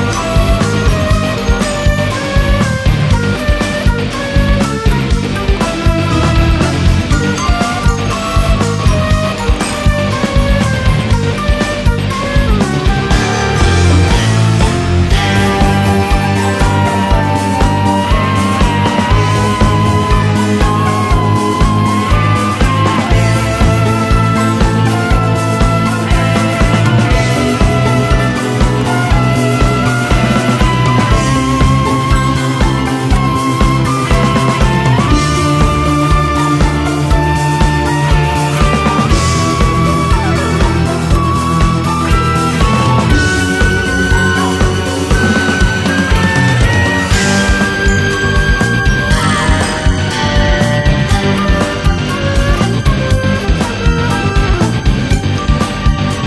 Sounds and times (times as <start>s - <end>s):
Progressive rock: 0.0s - 56.2s.